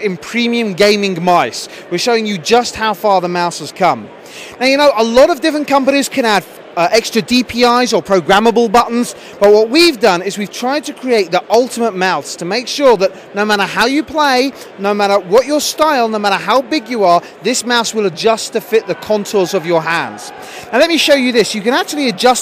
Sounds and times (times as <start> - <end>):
Speech: 0.0 - 22.4.